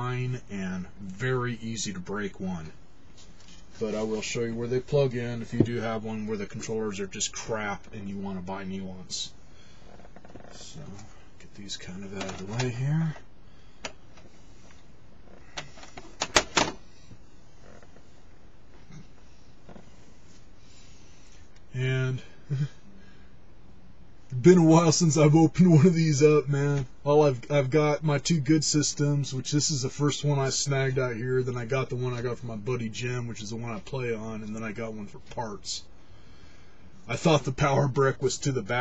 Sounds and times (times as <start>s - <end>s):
Speech: 0.0s - 2.8s, 3.8s - 9.4s, 10.5s - 13.2s, 21.7s - 22.8s, 24.3s - 35.9s, 37.1s - 38.8s
Inside, small room: 0.0s - 38.8s.